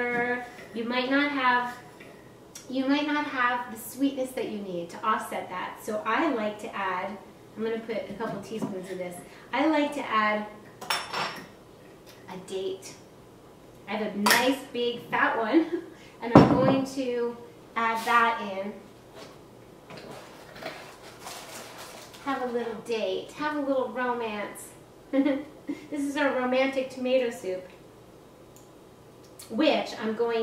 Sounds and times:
Speech: 0:00.0 - 0:01.8, 0:02.6 - 0:10.5, 0:12.3 - 0:13.0, 0:13.9 - 0:18.8, 0:22.2 - 0:24.8, 0:25.9 - 0:27.7, 0:29.4 - 0:30.4.

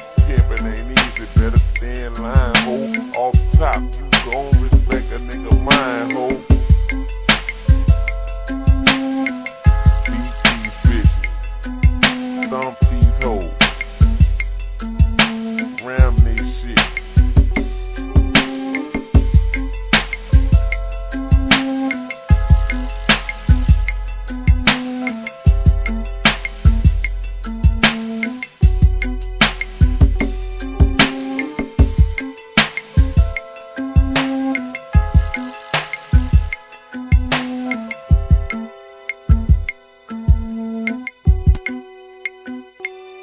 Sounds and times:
Hip hop music: 0:00.0 - 0:43.2.

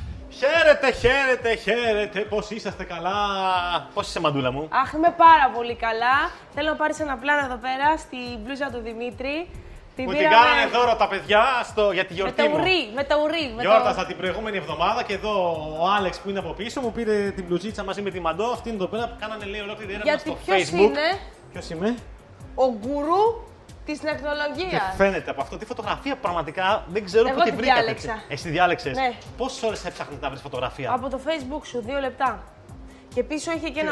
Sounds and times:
Music: 0:00.0 - 0:33.9.

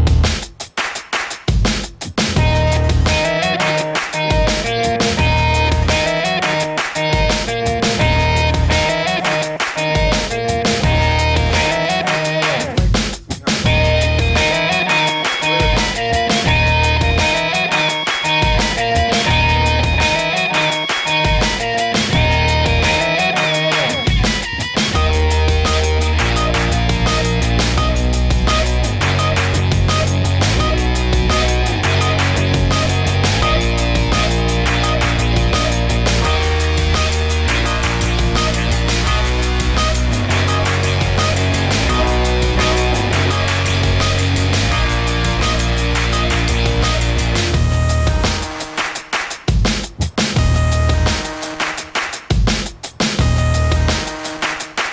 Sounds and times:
Music: 0:00.0 - 0:54.9.

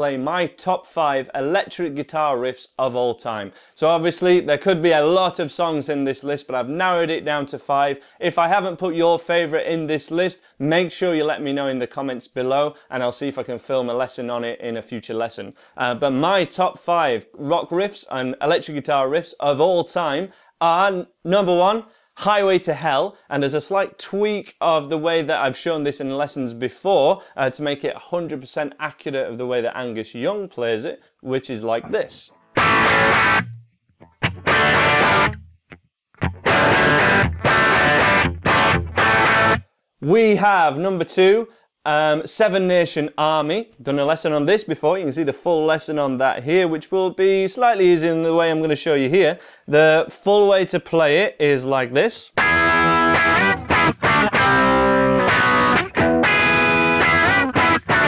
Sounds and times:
Speech: 0:00.0 - 0:32.3, 0:40.0 - 0:52.4
Distortion: 0:00.0 - 0:58.0
Electric guitar: 0:32.3 - 0:39.7, 0:52.4 - 0:58.0
Effects unit: 0:32.3 - 0:39.8, 0:52.4 - 0:58.0.

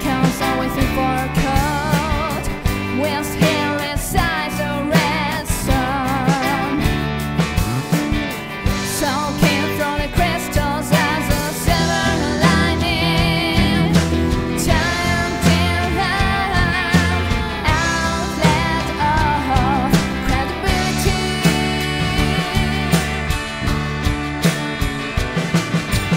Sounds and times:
Music: 0:00.0 - 0:26.1.

